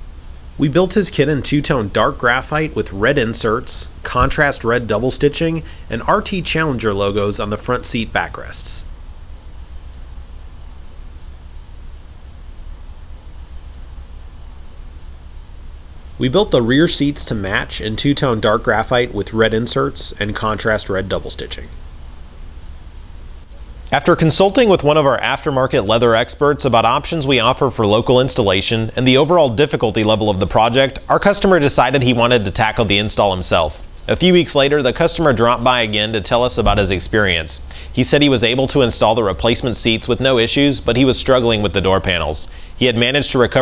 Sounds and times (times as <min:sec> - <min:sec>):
Speech: 0:00.6 - 0:08.9, 0:16.2 - 0:21.8, 0:23.9 - 0:43.6.